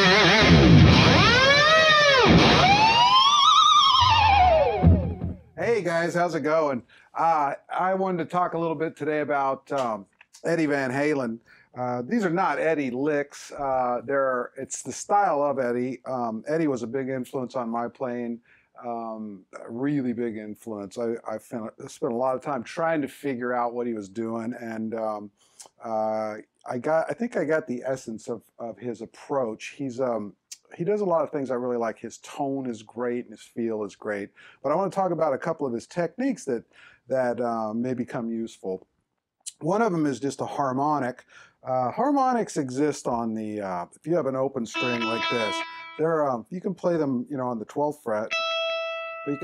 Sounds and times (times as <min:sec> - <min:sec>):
Speech: 0:05.6 - 0:38.8, 0:39.5 - 0:48.4.